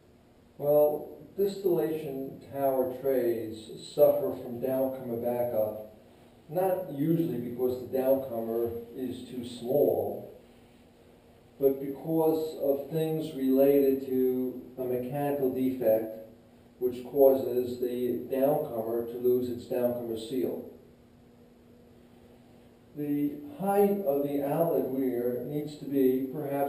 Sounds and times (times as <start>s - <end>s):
Speech: 0.6s - 5.9s, 6.5s - 10.4s, 11.6s - 20.8s, 23.0s - 26.6s.